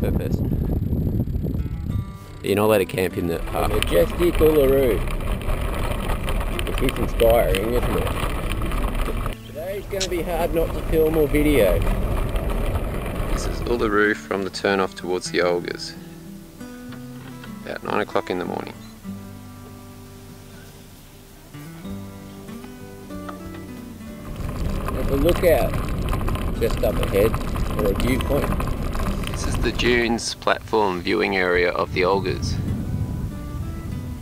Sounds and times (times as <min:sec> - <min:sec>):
Vehicle: 0:00.0 - 0:14.5, 0:24.0 - 0:30.3
Music: 0:01.6 - 0:05.2, 0:07.1 - 0:11.8, 0:13.4 - 0:25.8, 0:27.9 - 0:34.2
Speech: 0:02.4 - 0:05.0, 0:06.6 - 0:08.1, 0:09.5 - 0:11.8, 0:13.4 - 0:16.0, 0:17.6 - 0:18.8, 0:25.0 - 0:25.7, 0:26.6 - 0:28.5, 0:29.4 - 0:32.6.